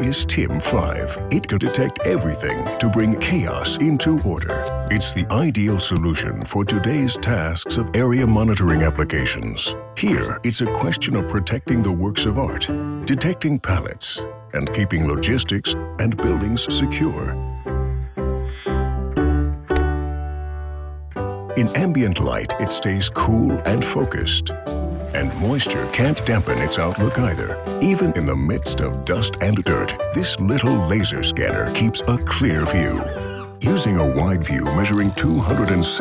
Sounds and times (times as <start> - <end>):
Speech: 0.0 - 17.4, 21.6 - 24.6, 25.2 - 36.0
Music: 0.0 - 36.0.